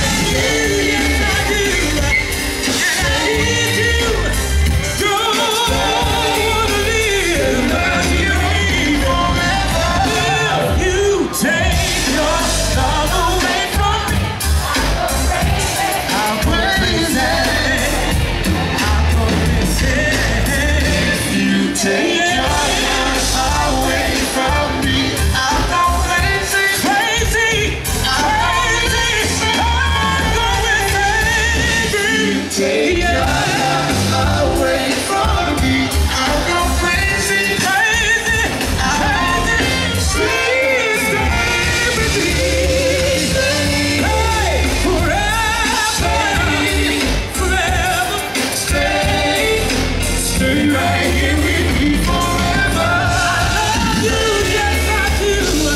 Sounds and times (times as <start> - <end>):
Music of Latin America: 0.0 - 55.7
Singing: 0.0 - 55.7.